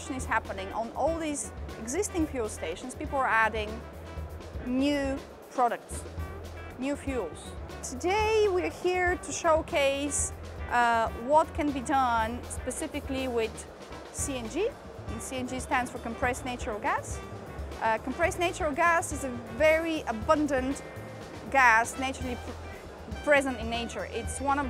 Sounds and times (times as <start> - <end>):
Speech: 0.0 - 3.8, 4.6 - 6.0, 6.8 - 17.2, 17.8 - 20.8, 21.5 - 22.5, 23.1 - 24.7
Music: 0.0 - 24.7.